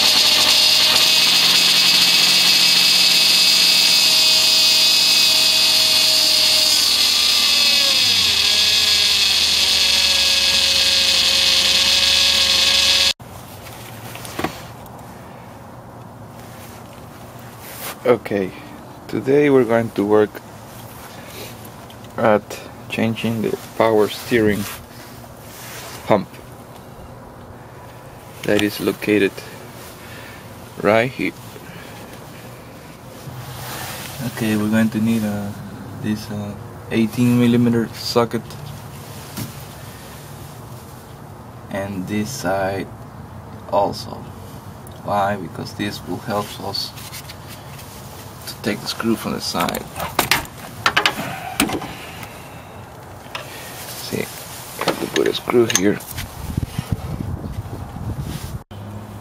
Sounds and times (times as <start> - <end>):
Speech: 18.0 - 20.4, 22.2 - 24.7, 26.1 - 26.3, 28.4 - 29.5, 30.8 - 31.4, 34.2 - 38.6, 41.7 - 42.9, 43.7 - 44.3, 45.0 - 47.0, 48.5 - 50.0, 54.0 - 56.0.